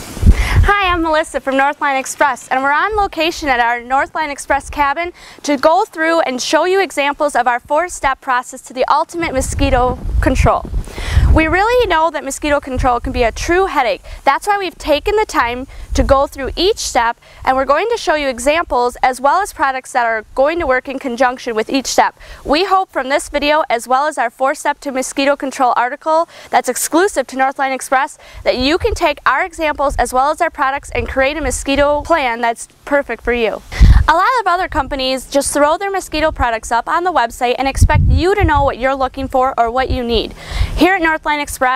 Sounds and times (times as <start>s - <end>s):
Speech: 0.6s - 10.7s, 11.3s - 41.7s.